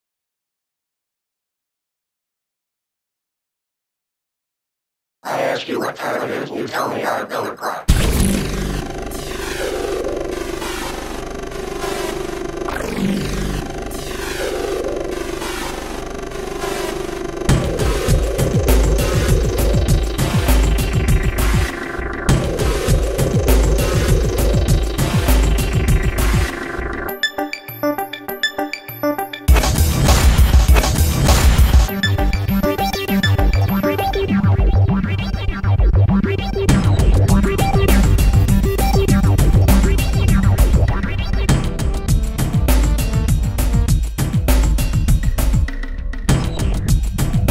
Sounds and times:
Electronic dance music: 0:05.3 - 0:45.7
Electronica: 0:05.3 - 0:47.5.

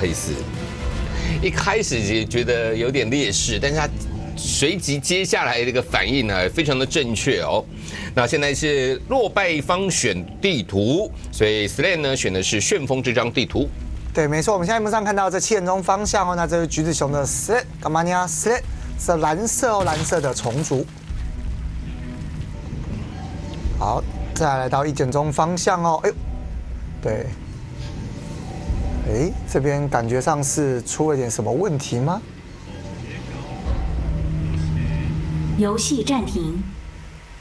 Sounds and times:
Music: 0:00.0 - 0:37.4.

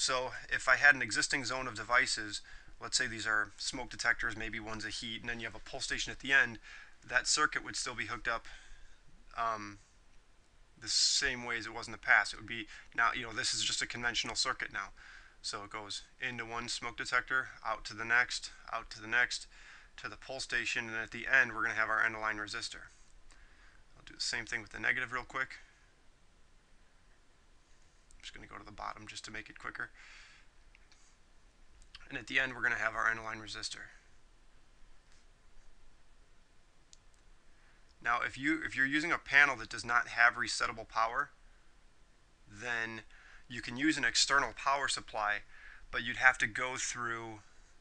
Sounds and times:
Speech: 0:00.0 - 0:08.6, 0:09.3 - 0:09.8, 0:10.8 - 0:23.0, 0:24.0 - 0:25.7, 0:28.2 - 0:30.0, 0:32.0 - 0:34.0, 0:38.0 - 0:41.4, 0:42.5 - 0:47.5.

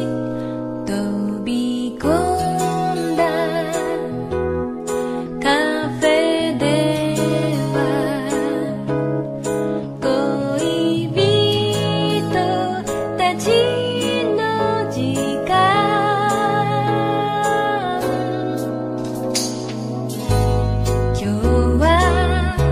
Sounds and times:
Music: 0:00.0 - 0:22.7.

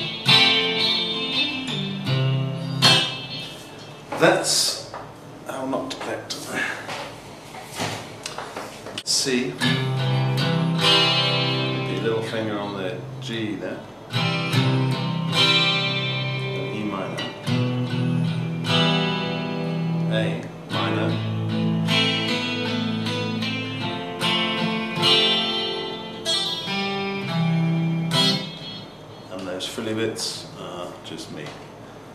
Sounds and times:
Electric guitar: 0:00.0 - 0:04.2, 0:09.6 - 0:13.2, 0:14.0 - 0:29.4
Strum: 0:00.0 - 0:04.3, 0:09.6 - 0:13.2, 0:14.0 - 0:29.6
Speech: 0:04.2 - 0:06.9, 0:09.0 - 0:09.6, 0:11.9 - 0:13.9, 0:16.6 - 0:17.3, 0:20.1 - 0:21.2, 0:29.3 - 0:31.6.

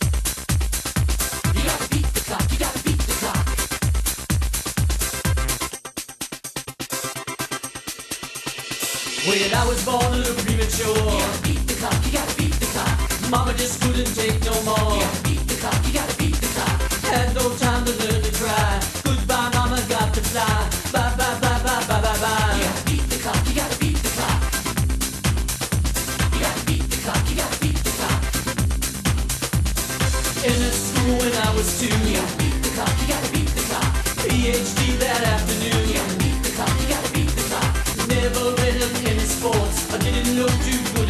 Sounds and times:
Music: 0:00.0 - 0:41.1.

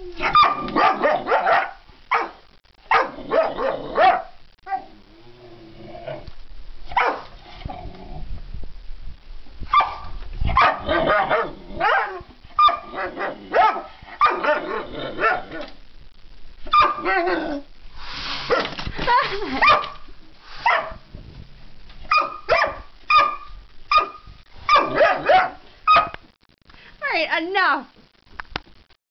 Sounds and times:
Speech: 0:27.0 - 0:27.9.

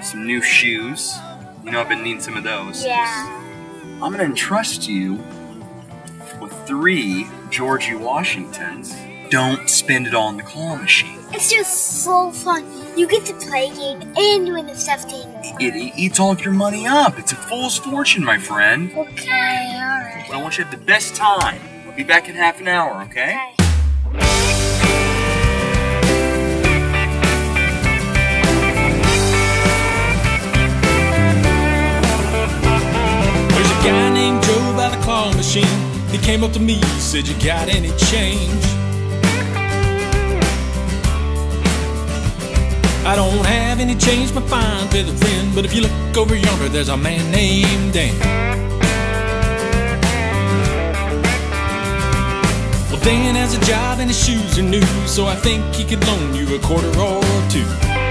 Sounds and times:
Speech: 0:00.0 - 0:03.4, 0:04.0 - 0:05.2, 0:15.4 - 0:23.6
Music: 0:00.0 - 0:58.1.

